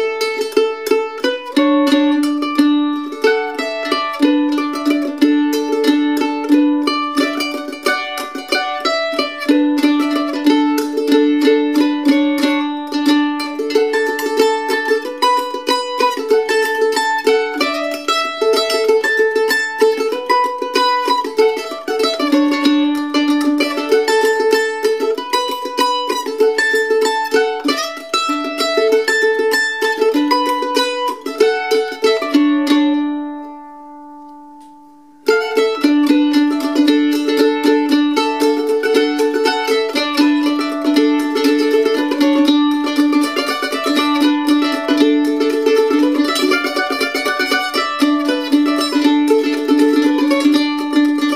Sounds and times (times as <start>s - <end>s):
Pizzicato: 0.0s - 51.3s.